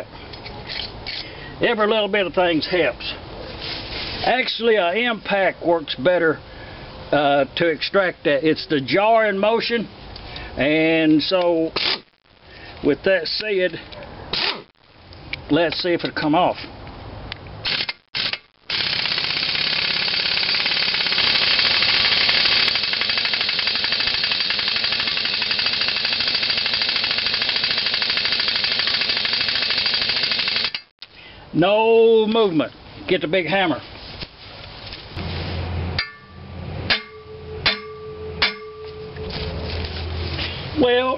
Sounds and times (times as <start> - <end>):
Outside, rural or natural: 0.0 - 41.1.